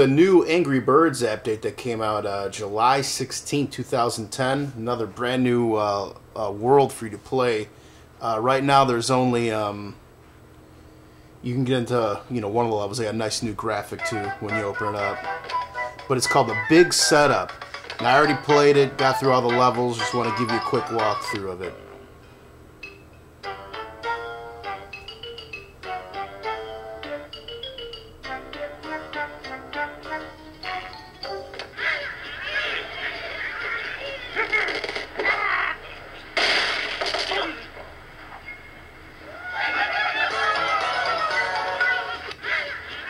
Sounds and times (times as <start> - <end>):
Music: 14.0 - 31.8, 40.1 - 42.4.